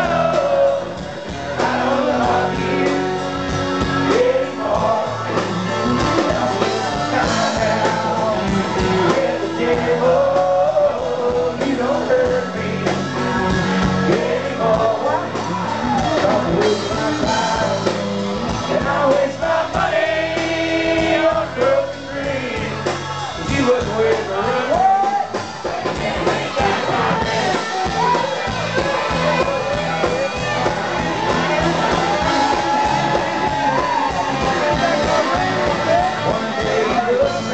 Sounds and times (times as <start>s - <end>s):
Music: 0.0s - 37.5s.